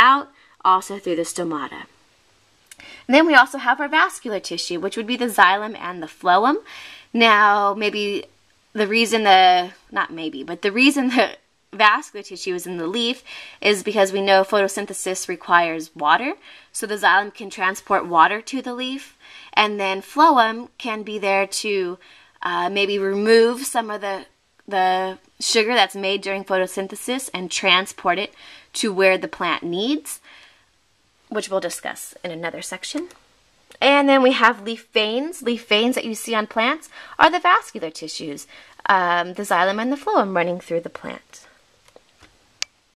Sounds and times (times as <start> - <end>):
Speech: 0.0 - 1.9, 2.7 - 30.3, 31.3 - 41.6
Inside, small room: 0.0 - 42.9.